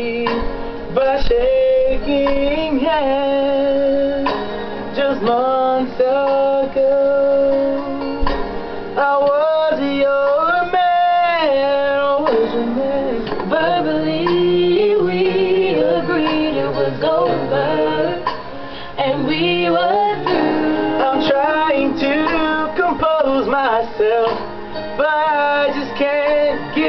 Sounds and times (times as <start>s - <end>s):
Male singing: 0.0s - 8.2s, 9.0s - 18.4s, 19.0s - 26.8s
Music: 0.0s - 26.8s.